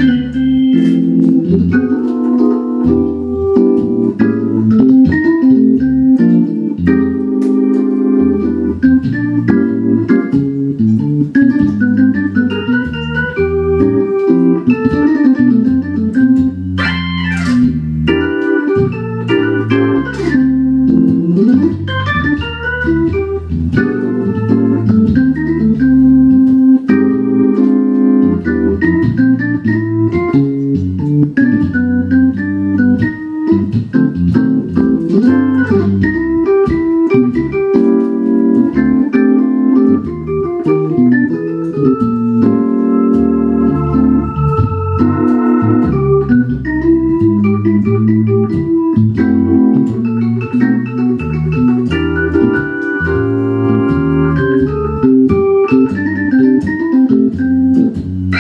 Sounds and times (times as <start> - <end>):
Hammond organ: 0.0 - 58.4.